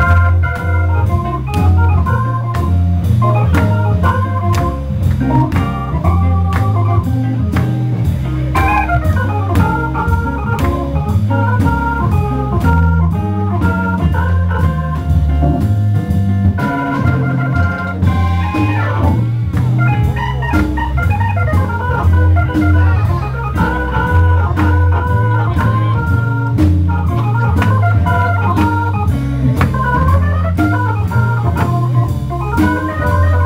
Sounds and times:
Music: 0.0 - 33.4
Speech: 8.0 - 9.5, 21.3 - 26.4.

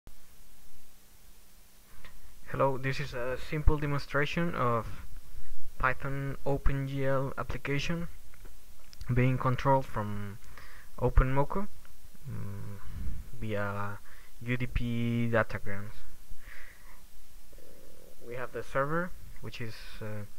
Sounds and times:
Inside, small room: 0.1 - 20.3
Speech: 2.5 - 5.1, 5.8 - 8.2, 9.0 - 10.4, 11.0 - 16.1, 18.2 - 20.3.

